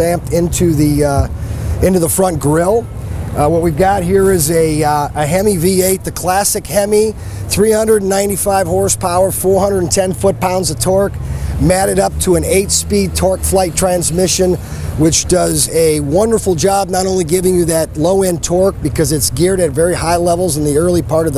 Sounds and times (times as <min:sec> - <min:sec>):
Car: 0:00.0 - 0:21.3
Speech: 0:00.0 - 0:21.3.